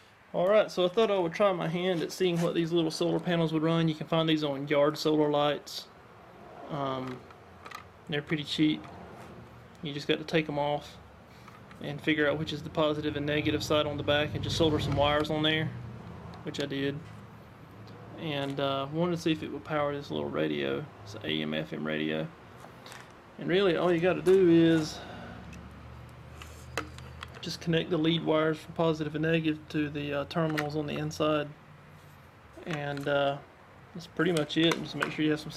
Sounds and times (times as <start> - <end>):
Speech: 0.4 - 5.9, 6.7 - 7.2, 8.1 - 8.9, 9.8 - 11.0, 11.8 - 15.8, 16.5 - 17.1, 18.2 - 22.4, 23.4 - 25.0, 27.4 - 31.6, 32.6 - 35.5.